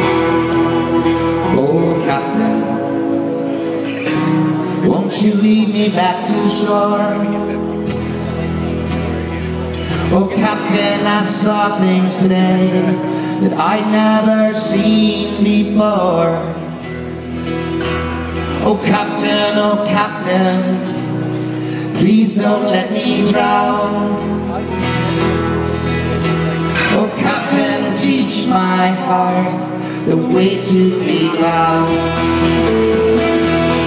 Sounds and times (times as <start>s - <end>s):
Independent music: 0.0s - 33.8s.